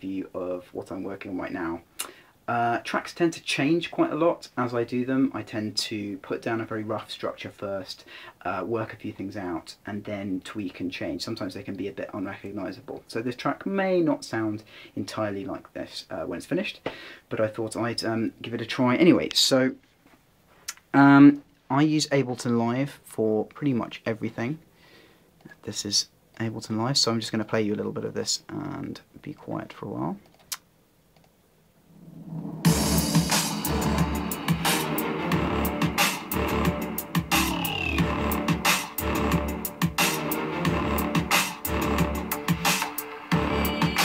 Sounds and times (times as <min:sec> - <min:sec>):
Speech: 0:00.0 - 0:01.9, 0:02.5 - 0:19.8, 0:20.9 - 0:24.6, 0:25.5 - 0:30.2.